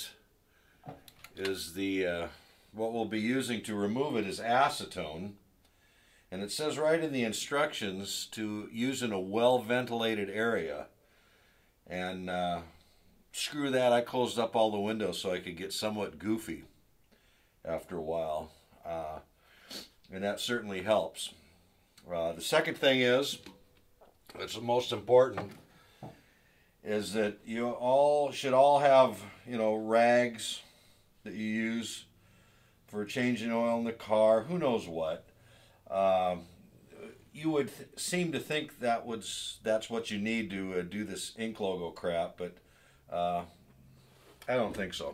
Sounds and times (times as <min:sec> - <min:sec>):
Speech: 0:00.0 - 0:00.2, 0:01.3 - 0:05.4, 0:06.3 - 0:11.0, 0:11.9 - 0:16.8, 0:17.6 - 0:19.3, 0:20.1 - 0:21.4, 0:22.0 - 0:23.5, 0:24.3 - 0:25.6, 0:26.8 - 0:32.1, 0:32.9 - 0:35.3, 0:35.9 - 0:43.6, 0:44.4 - 0:45.1.